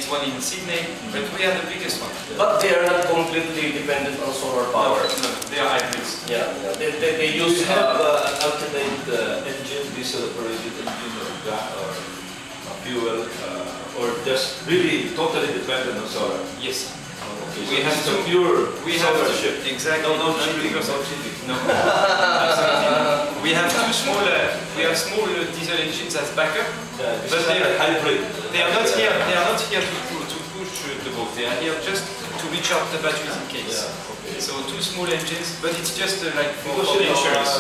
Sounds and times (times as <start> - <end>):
Speech: 0.0 - 12.1, 12.7 - 21.7, 22.5 - 37.6.